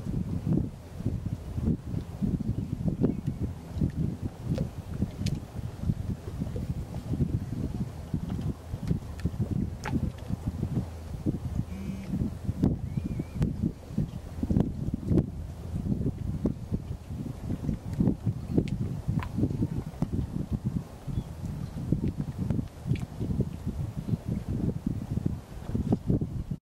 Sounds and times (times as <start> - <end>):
Wind noise (microphone): 0.0 - 26.6.